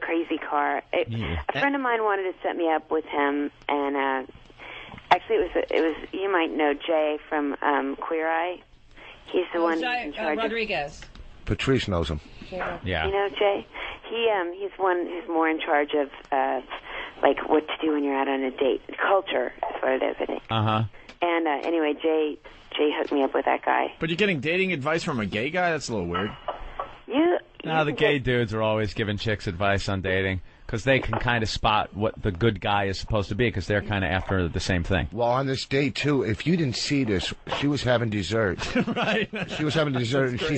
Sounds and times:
Speech: 0.1 - 4.3, 11.5 - 26.4, 27.1 - 40.5.

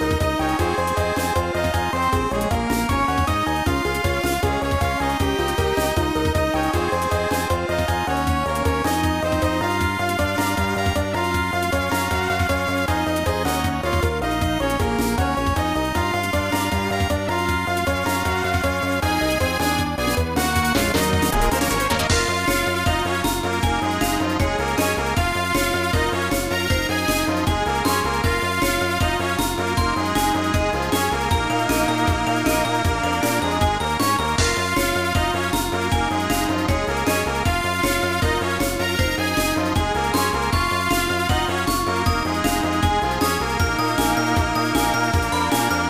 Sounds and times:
Music: 0.0 - 45.9.

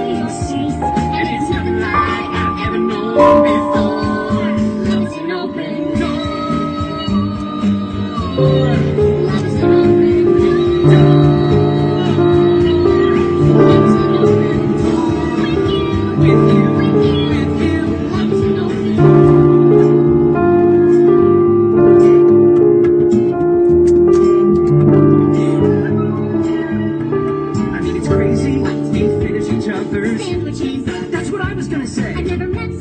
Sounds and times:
Child singing: 0.0 - 20.3, 25.6 - 32.8
Female singing: 0.0 - 20.8, 25.2 - 32.8
Music: 0.0 - 32.8.

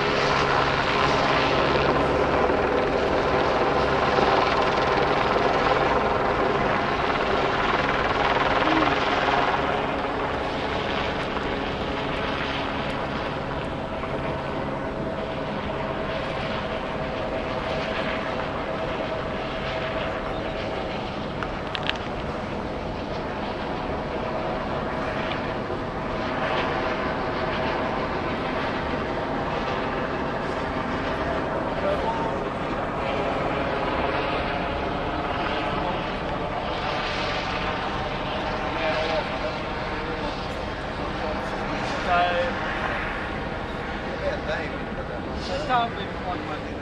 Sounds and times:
Outside, urban or manmade: 0.0 - 46.8.

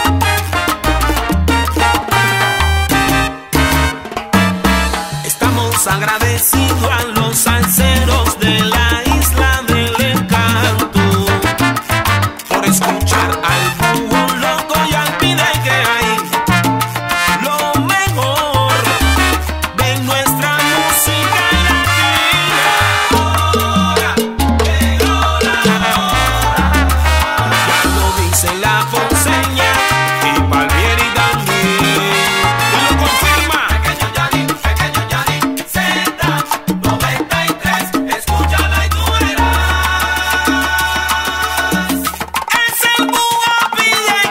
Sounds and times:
Salsa music: 0.0 - 44.3.

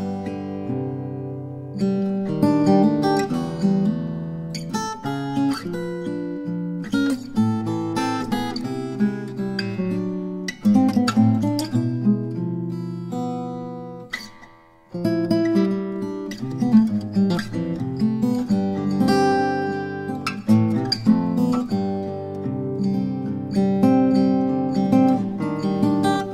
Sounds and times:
Acoustic guitar: 0.0 - 26.3.

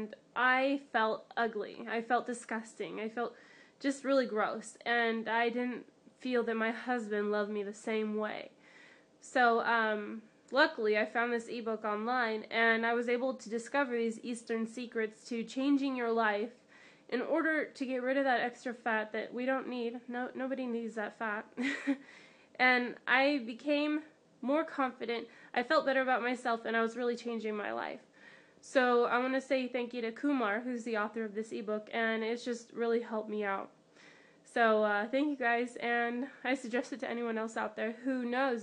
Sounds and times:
Speech: 0.0 - 8.5, 9.2 - 22.0, 22.6 - 28.0, 28.6 - 33.7, 34.5 - 38.6.

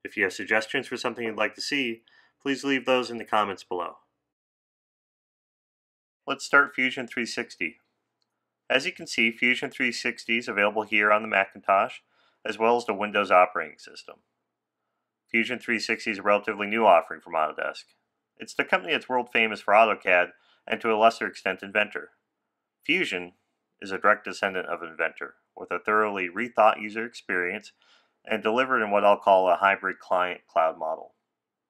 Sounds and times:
Speech: 0.0 - 4.1, 6.3 - 7.8, 8.7 - 14.2, 15.3 - 22.2, 22.9 - 31.2.

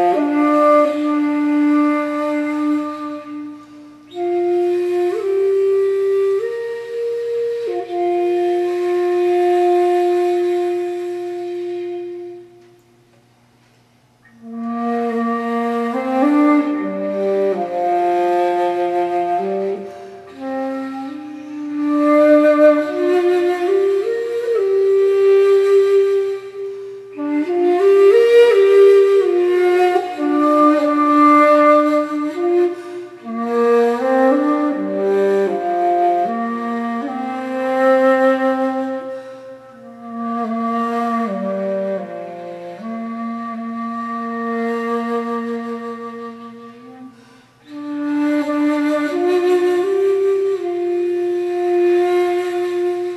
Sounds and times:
Music: 0.0 - 13.4, 14.2 - 53.1.

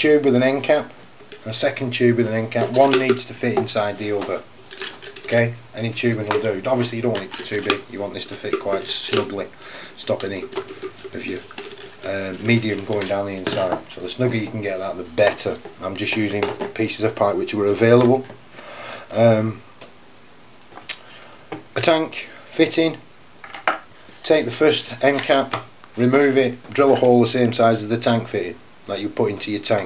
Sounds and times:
Speech: 0.0 - 4.5, 5.2 - 18.4, 19.1 - 19.6, 21.8 - 23.0, 24.2 - 29.8.

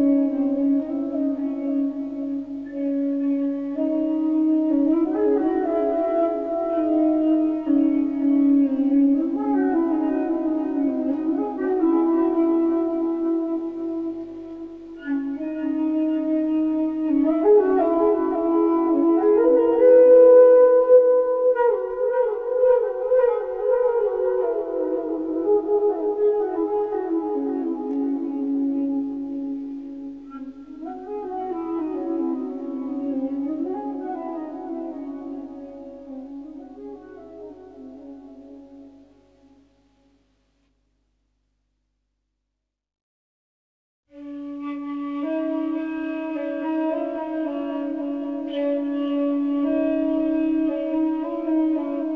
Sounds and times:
Flute: 0.0 - 40.3, 44.1 - 52.1.

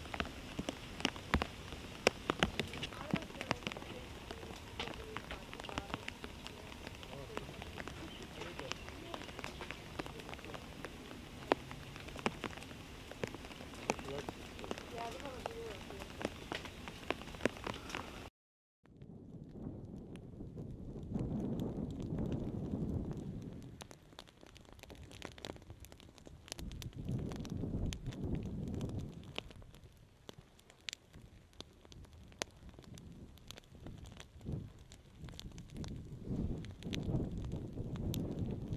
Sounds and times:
Outside, rural or natural: 0.0 - 38.7
Speech: 2.8 - 10.7, 13.9 - 14.3, 14.9 - 16.1.

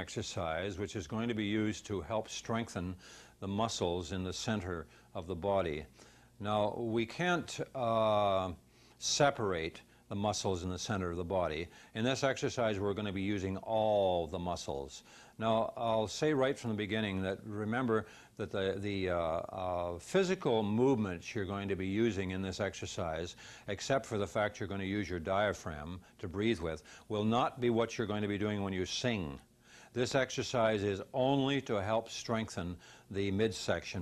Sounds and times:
Speech: 0.0 - 34.0.

